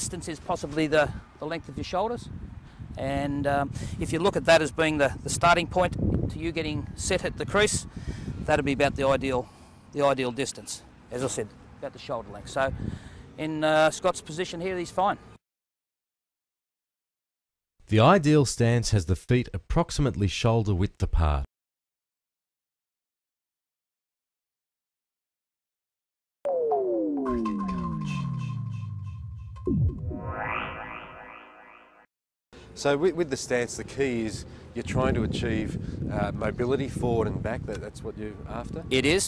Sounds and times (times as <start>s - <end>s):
Speech: 0.0s - 2.3s, 3.0s - 7.8s, 8.5s - 12.8s, 13.4s - 15.2s, 17.9s - 21.5s, 32.8s - 39.2s.